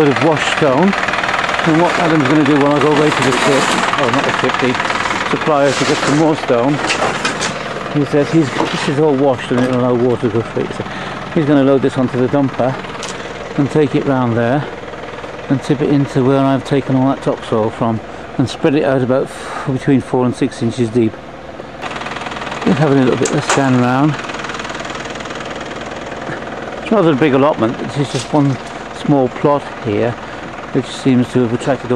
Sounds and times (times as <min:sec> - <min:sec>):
Speech: 0:00.0 - 0:01.0, 0:01.6 - 0:06.8, 0:07.9 - 0:12.8, 0:13.6 - 0:14.8, 0:15.5 - 0:21.2, 0:22.6 - 0:24.2, 0:26.8 - 0:31.9
Sewing machine: 0:00.0 - 0:07.9, 0:21.8 - 0:26.2
Outside, rural or natural: 0:00.0 - 0:31.9.